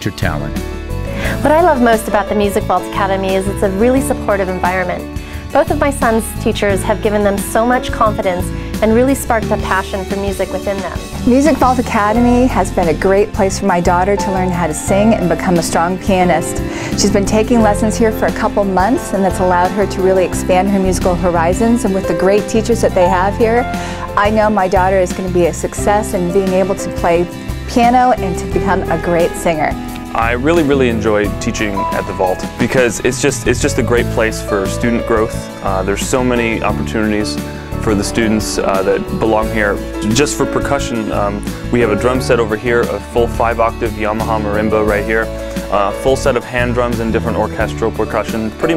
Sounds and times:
Speech: 0:00.0 - 0:00.6, 0:05.6 - 0:16.4, 0:24.2 - 0:48.7
Tender music: 0:00.0 - 0:48.7.

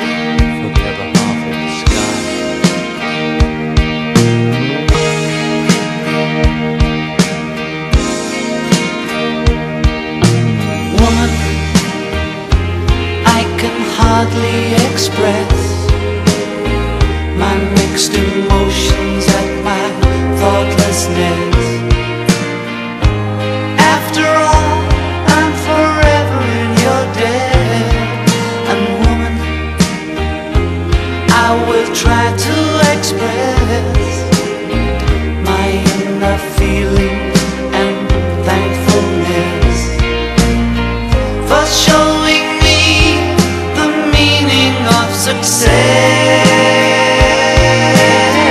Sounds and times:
Music: 0:00.0 - 0:48.5.

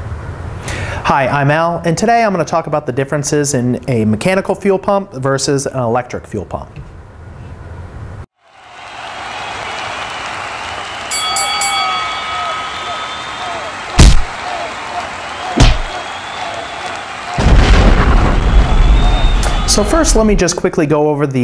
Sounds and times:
Boom: 0:14.0 - 0:14.3, 0:17.4 - 0:20.5.

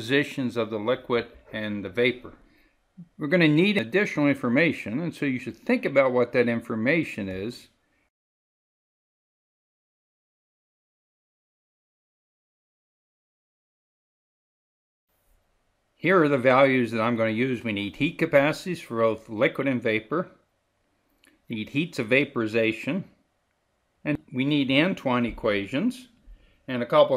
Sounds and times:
Speech: 0:00.0 - 0:02.4, 0:03.0 - 0:07.8, 0:16.0 - 0:20.4, 0:21.5 - 0:23.2, 0:24.1 - 0:27.1.

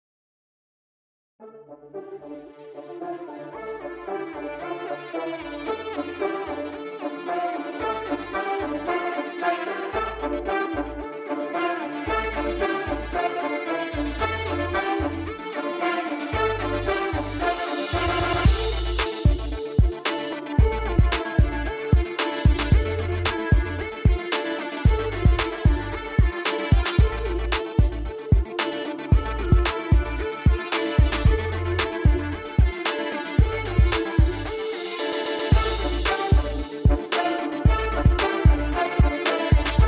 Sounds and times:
Exciting music: 0:02.3 - 0:39.8.

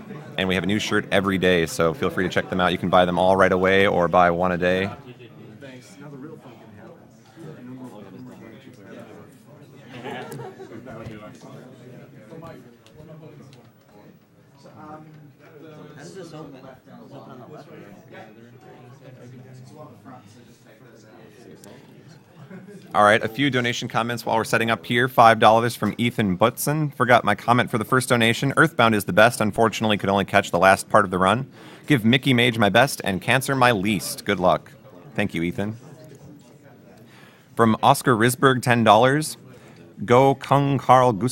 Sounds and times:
Speech: 0:00.0 - 0:41.3.

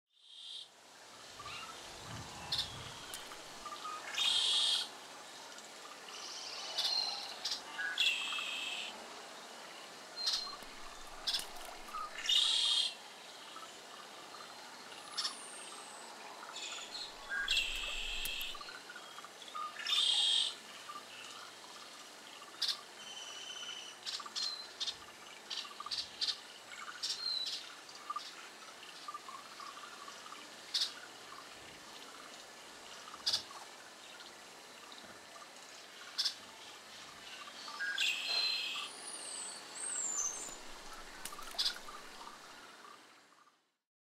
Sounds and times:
Outside, rural or natural: 0:00.1 - 0:43.8
Chirp, tweet: 0:01.4 - 0:04.7, 0:16.5 - 0:20.6, 0:37.2 - 0:42.3.

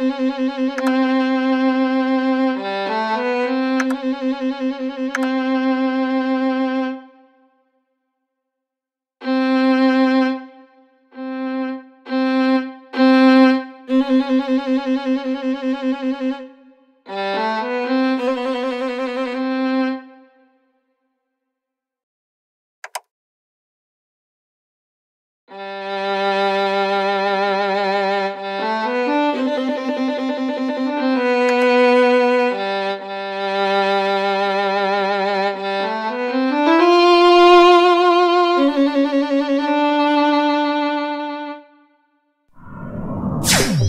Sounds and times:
Music: 0:00.0 - 0:08.6, 0:09.2 - 0:21.7, 0:25.5 - 0:42.5.

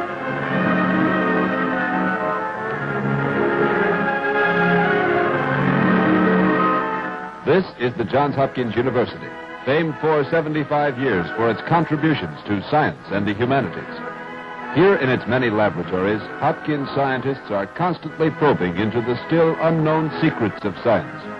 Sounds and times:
Music: 0:00.0 - 0:21.4
Speech: 0:07.4 - 0:14.0, 0:14.8 - 0:21.3.

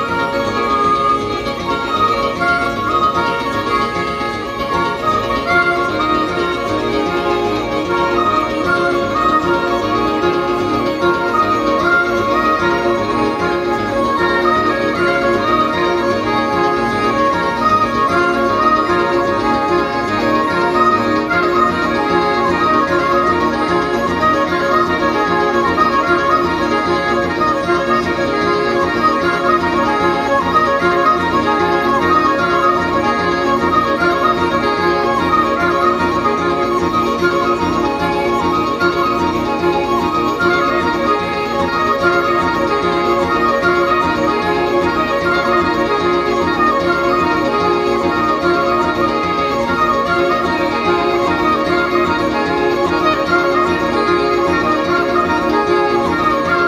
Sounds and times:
Background music: 0:00.0 - 0:56.6.

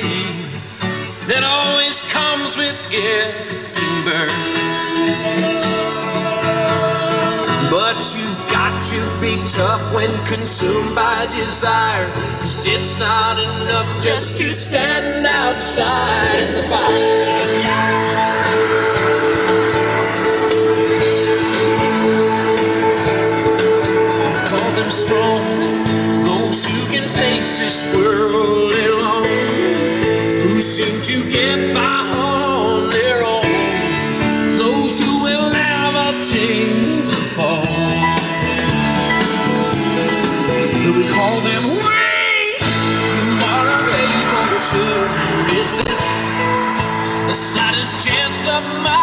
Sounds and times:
Music: 0:00.0 - 0:49.0.

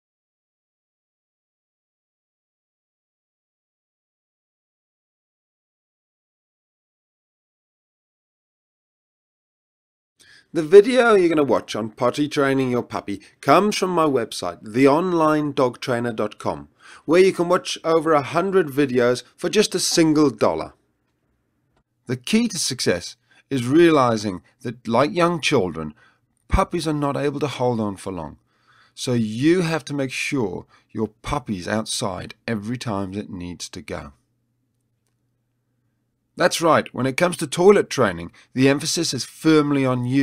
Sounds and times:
Speech: 0:10.5 - 0:20.8, 0:22.1 - 0:28.4, 0:29.0 - 0:34.2, 0:36.4 - 0:40.2.

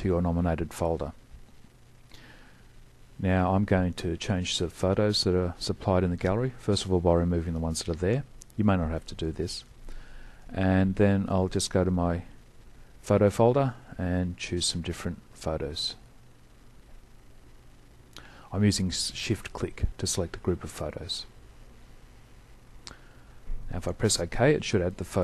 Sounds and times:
Speech: 0:00.0 - 0:01.2, 0:03.2 - 0:09.7, 0:10.5 - 0:12.4, 0:13.0 - 0:16.1, 0:18.5 - 0:21.4, 0:23.7 - 0:25.2.

